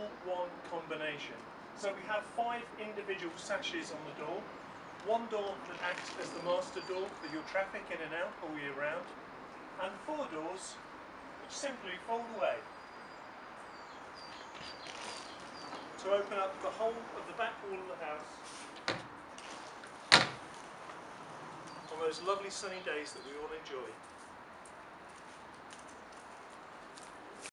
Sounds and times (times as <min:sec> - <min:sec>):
Speech: 0:00.0 - 0:09.1, 0:09.8 - 0:10.8, 0:11.5 - 0:12.7, 0:16.0 - 0:18.4, 0:21.9 - 0:24.0.